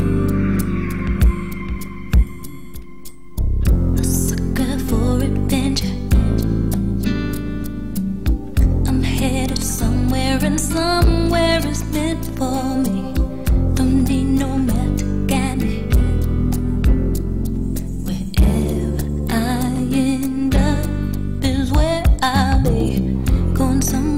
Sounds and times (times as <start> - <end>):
Music: 0.0 - 24.1.